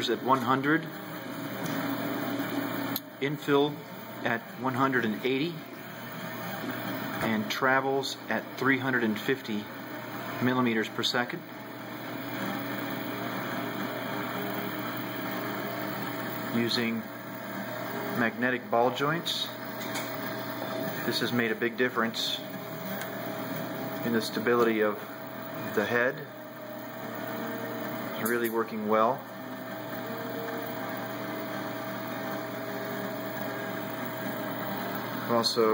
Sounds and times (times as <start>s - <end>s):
Speech: 0.0s - 0.9s, 3.2s - 5.6s, 7.2s - 9.7s, 10.4s - 11.5s, 16.5s - 17.1s, 18.2s - 19.6s, 21.0s - 22.5s, 24.0s - 25.0s, 25.6s - 26.3s, 28.2s - 29.2s, 35.3s - 35.7s
Printer: 0.0s - 35.7s.